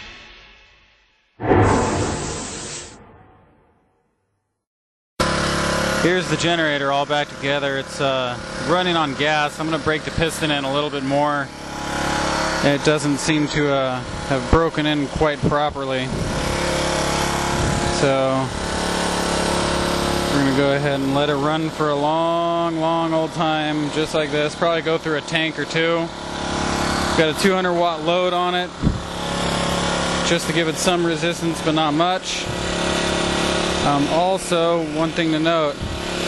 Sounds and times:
Speech: 0:06.0 - 0:11.5, 0:12.6 - 0:16.1, 0:18.0 - 0:18.6, 0:20.3 - 0:26.1, 0:27.2 - 0:28.8, 0:30.2 - 0:32.5, 0:33.8 - 0:35.8
Idling: 0:16.5 - 0:36.2.

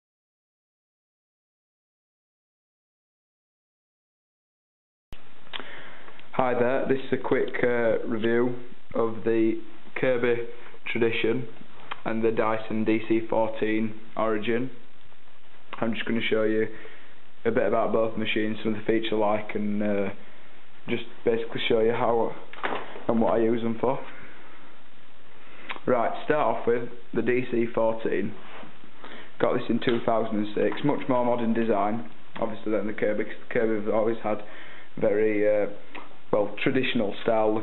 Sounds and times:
Speech: 0:06.3 - 0:14.8, 0:15.7 - 0:16.8, 0:17.4 - 0:20.2, 0:20.8 - 0:24.2, 0:25.7 - 0:28.4, 0:29.4 - 0:37.6.

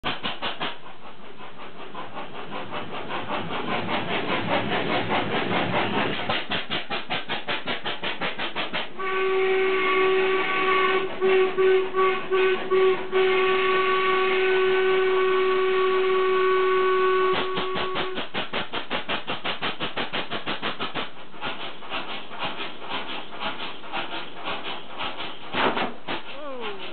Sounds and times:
Engine: 0:00.0 - 0:26.9
Steam whistle: 0:09.0 - 0:18.2.

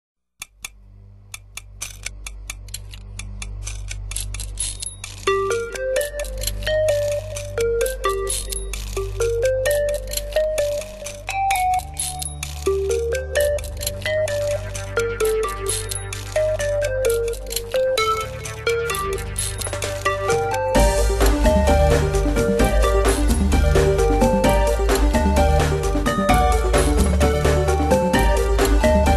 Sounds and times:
Theme music: 0:05.3 - 0:29.1.

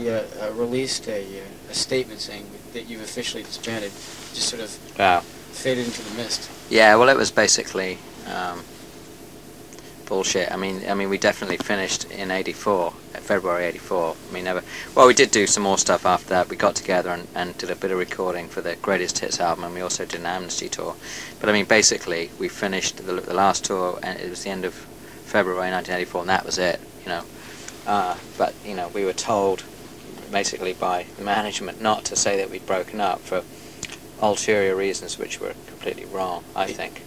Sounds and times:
Speech: 0:00.0 - 0:08.7, 0:10.1 - 0:33.4, 0:34.2 - 0:37.0.

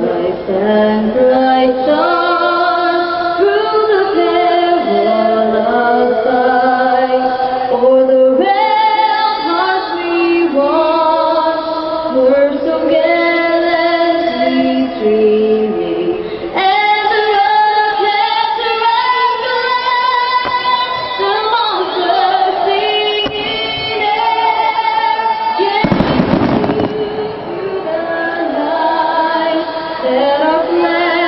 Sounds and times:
Female singing: 0:00.0 - 0:31.2.

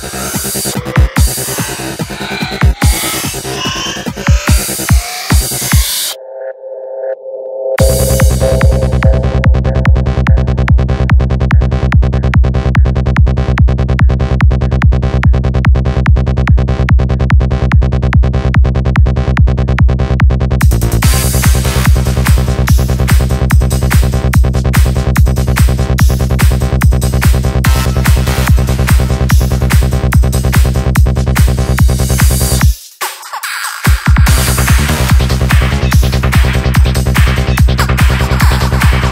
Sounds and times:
Trance music: 0:00.0 - 0:39.1.

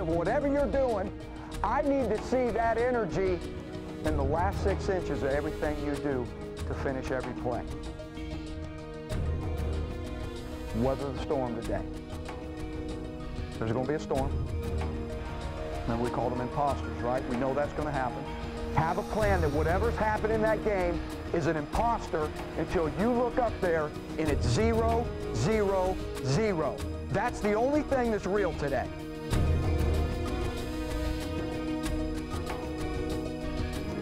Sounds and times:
Male speech, man speaking: 0:00.0 - 0:07.7, 0:10.7 - 0:11.9, 0:13.6 - 0:14.3, 0:15.9 - 0:18.2, 0:18.8 - 0:28.9
Music: 0:00.0 - 0:34.0
Narration, monologue: 0:00.0 - 0:34.0.

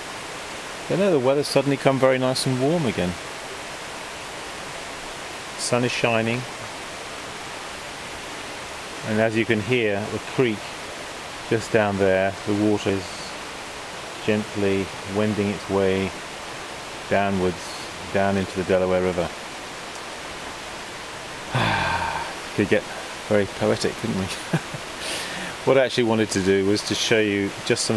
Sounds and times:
Outside, rural or natural: 0:00.0 - 0:27.9
Pink noise: 0:00.0 - 0:27.9
Speech: 0:00.9 - 0:03.2, 0:05.6 - 0:06.5, 0:09.0 - 0:10.7, 0:11.5 - 0:13.3, 0:14.2 - 0:16.2, 0:17.1 - 0:19.3, 0:22.6 - 0:24.4, 0:25.6 - 0:27.9.

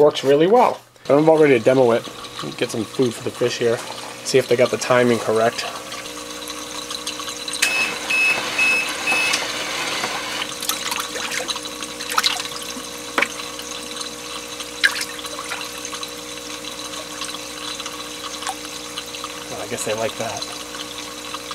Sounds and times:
Speech: 0:00.0 - 0:05.8, 0:19.5 - 0:20.6
Fill (with liquid): 0:00.0 - 0:21.5.

